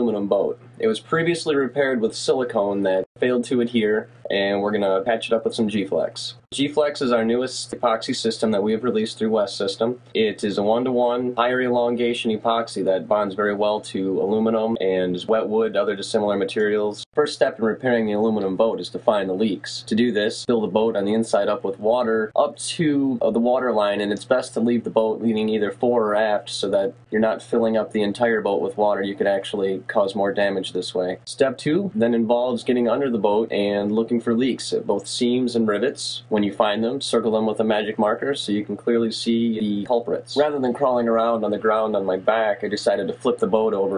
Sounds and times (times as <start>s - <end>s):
Speech: 0.0s - 43.9s.